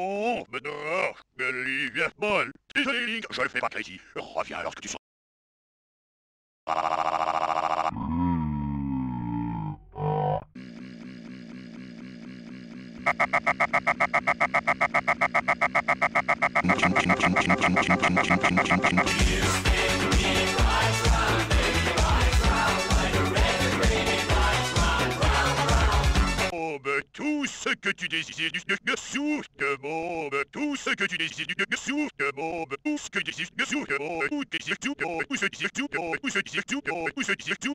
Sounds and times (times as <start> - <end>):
Speech: 0.0 - 5.0, 26.6 - 37.7
Music: 18.7 - 26.5.